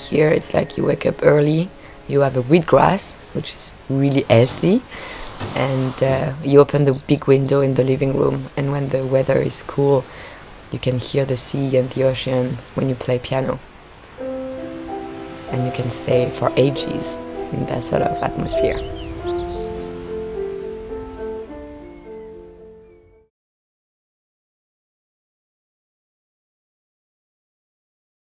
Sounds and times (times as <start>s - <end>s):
Music: 0.0s - 5.4s, 14.2s - 23.3s
Chirp, tweet: 18.0s - 20.1s, 21.9s - 23.3s.